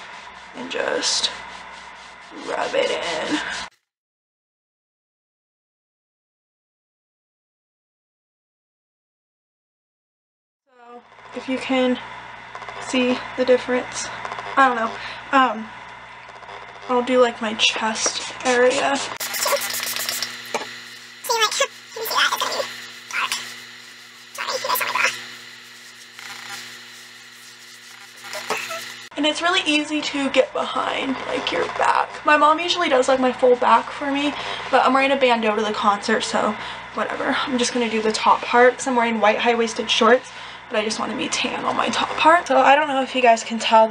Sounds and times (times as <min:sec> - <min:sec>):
Speech: 0:00.6 - 0:01.4, 0:02.3 - 0:03.6, 0:10.7 - 0:12.0, 0:12.8 - 0:15.7, 0:16.9 - 0:19.6, 0:21.3 - 0:23.5, 0:24.4 - 0:25.2, 0:28.5 - 0:43.9.